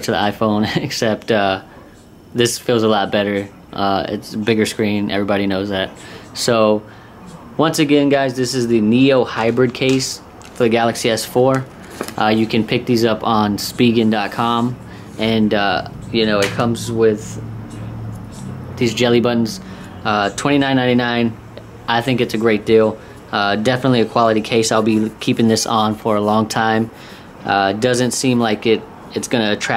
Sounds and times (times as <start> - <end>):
Speech: 0.0 - 17.4, 18.3 - 29.7
Inside, small room: 0.0 - 29.7.